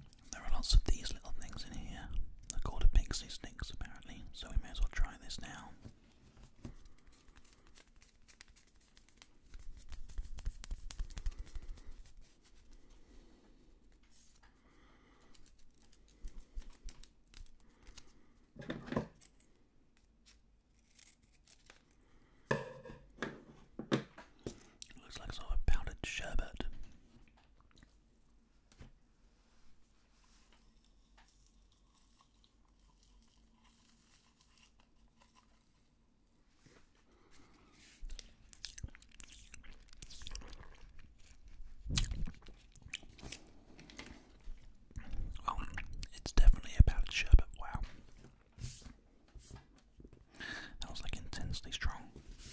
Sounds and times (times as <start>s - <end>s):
Inside, small room: 0.0s - 52.5s.